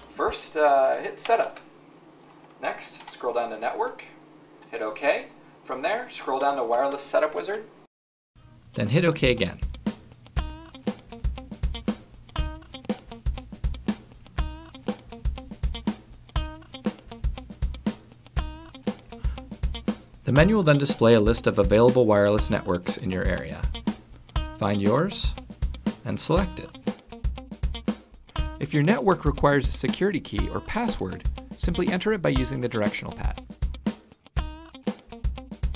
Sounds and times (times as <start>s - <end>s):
Speech: 0.1s - 1.6s, 2.6s - 7.8s, 8.8s - 9.7s, 20.3s - 23.7s, 24.6s - 25.4s, 26.0s - 26.8s, 28.6s - 33.4s
Music: 8.4s - 35.7s.